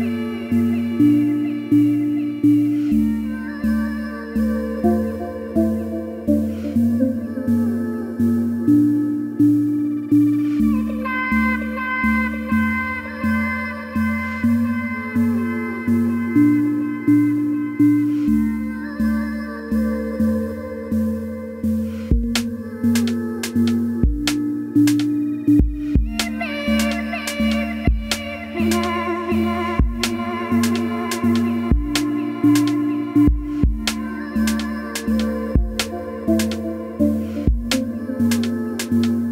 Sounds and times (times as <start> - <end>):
Synthesizer: 0.0 - 39.3.